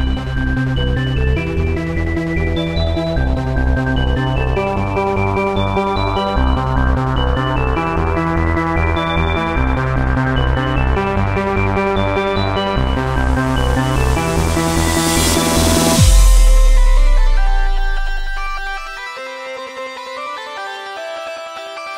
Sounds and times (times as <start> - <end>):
Techno: 0.0 - 19.1.